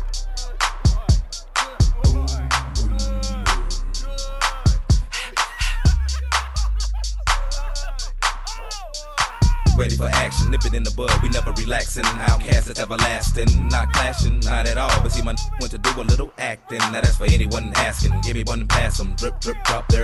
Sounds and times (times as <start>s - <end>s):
Music: 0.0s - 20.0s
Speech: 0.2s - 5.9s, 7.1s - 20.0s.